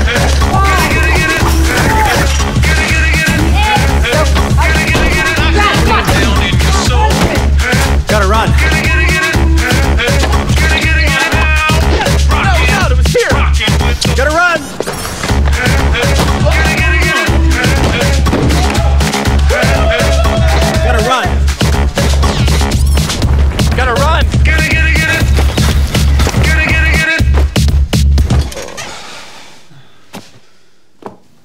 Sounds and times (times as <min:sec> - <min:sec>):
Music: 0:00.0 - 0:29.2.